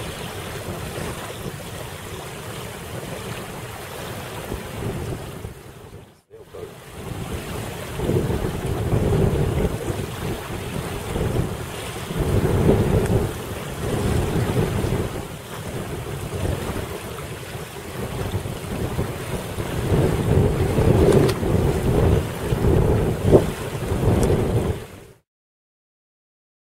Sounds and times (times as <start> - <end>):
Sailboat, sailing ship: 0.0 - 25.2
Speech: 6.2 - 6.8.